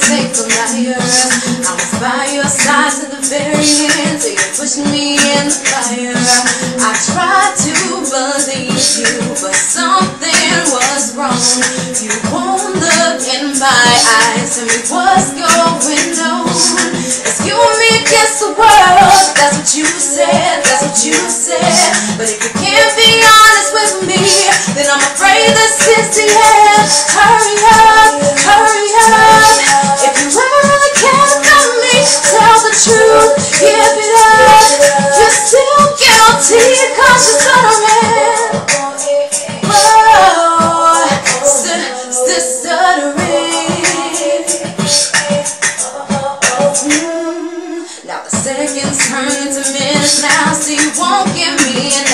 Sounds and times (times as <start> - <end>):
Music: 0.0 - 52.1.